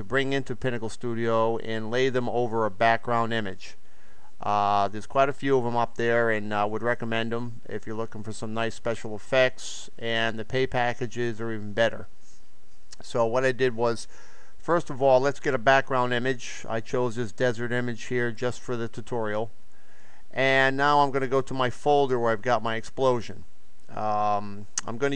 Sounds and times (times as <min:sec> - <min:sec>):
Speech: 0:00.0 - 0:03.8, 0:04.4 - 0:12.1, 0:13.0 - 0:19.5, 0:20.4 - 0:25.1.